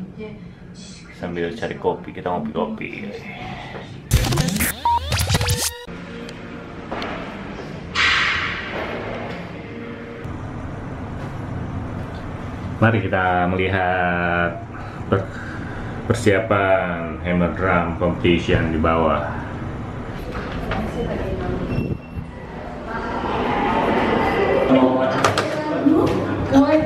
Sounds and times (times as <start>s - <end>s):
Music: 4.1s - 10.3s.